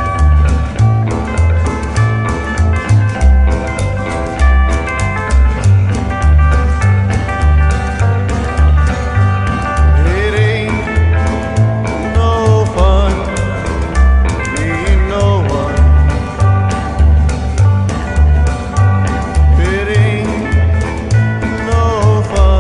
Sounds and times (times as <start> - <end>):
Music: 0.0 - 22.6.